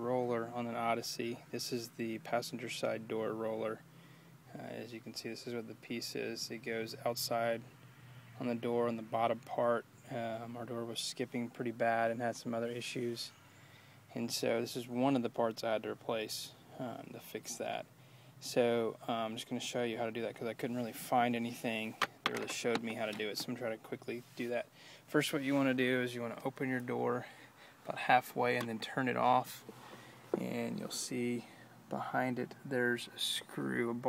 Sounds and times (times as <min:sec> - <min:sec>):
Speech: 0:00.0 - 0:03.8, 0:04.5 - 0:07.7, 0:08.4 - 0:13.4, 0:14.1 - 0:27.3, 0:27.9 - 0:29.6, 0:30.4 - 0:34.0.